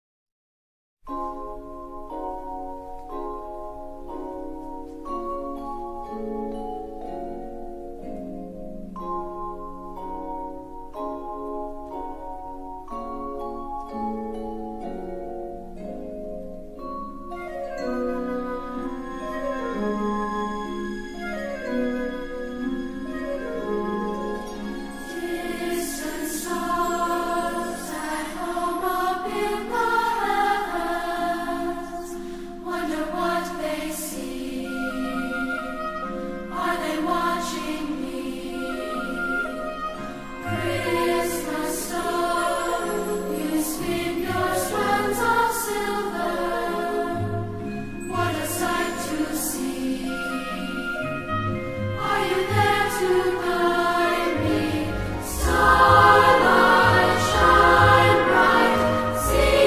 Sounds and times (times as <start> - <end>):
Vibraphone: 1.1 - 30.5, 38.2 - 59.6.